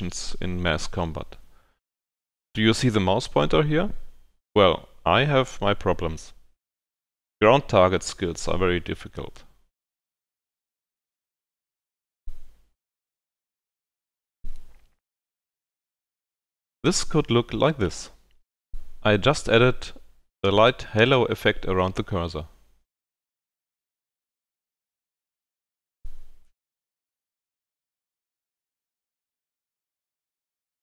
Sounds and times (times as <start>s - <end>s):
Speech: 0.0s - 1.4s, 2.6s - 6.4s, 7.4s - 9.6s, 16.8s - 18.2s, 19.0s - 22.6s.